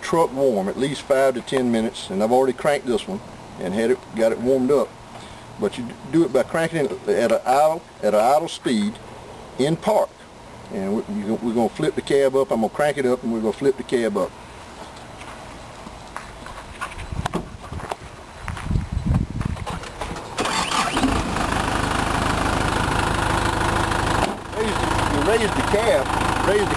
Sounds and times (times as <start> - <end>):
Speech: 0.0 - 4.9, 5.6 - 9.0, 9.6 - 10.1, 10.7 - 14.3, 24.6 - 26.7.